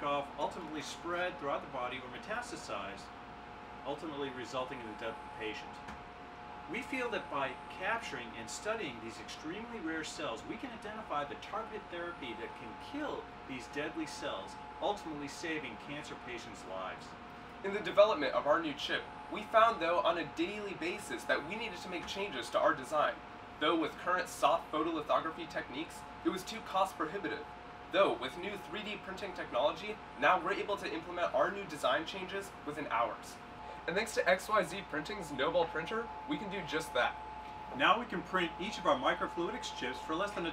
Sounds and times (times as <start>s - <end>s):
Speech: 0.0s - 3.1s, 3.8s - 5.9s, 6.7s - 40.5s.